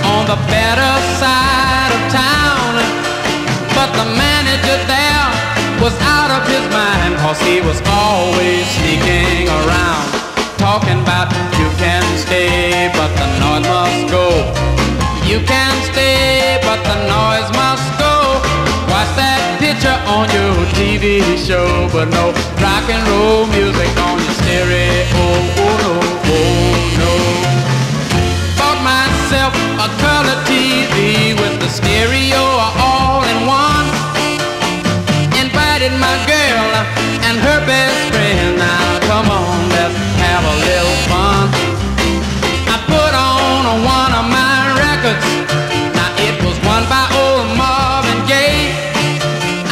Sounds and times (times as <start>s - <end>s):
Musical instrument: 0.0s - 49.7s.